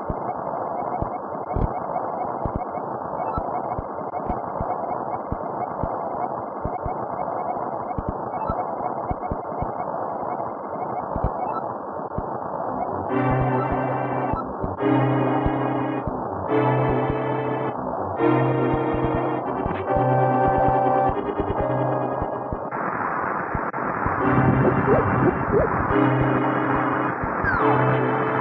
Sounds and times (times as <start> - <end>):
Music: 12.8 - 22.7, 24.1 - 28.4.